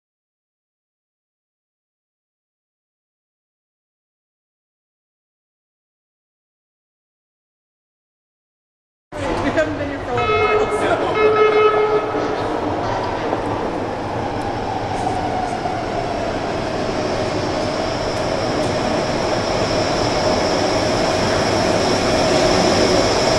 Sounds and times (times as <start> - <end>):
Speech: 9.1 - 13.5
Inside, public space: 9.1 - 23.3
Subway, metro, underground: 9.1 - 23.3.